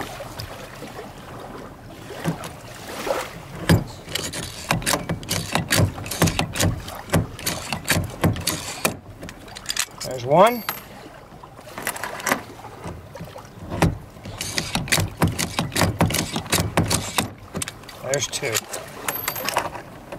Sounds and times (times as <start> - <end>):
Rowboat, canoe, kayak: 0.0 - 20.1
Speech: 10.0 - 10.7, 18.0 - 18.6.